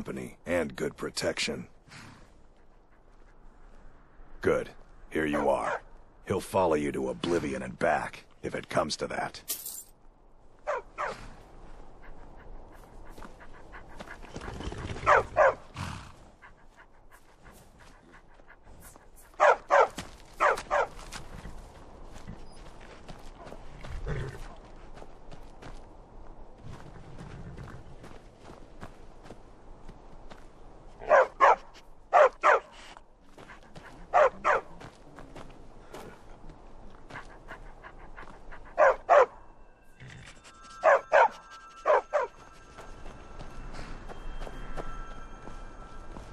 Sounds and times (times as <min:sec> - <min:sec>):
Bow-wow: 0:10.7 - 0:11.2, 0:14.9 - 0:15.6, 0:19.4 - 0:21.0, 0:31.0 - 0:31.6, 0:32.2 - 0:32.7, 0:34.1 - 0:34.7, 0:38.8 - 0:39.4, 0:40.7 - 0:42.4.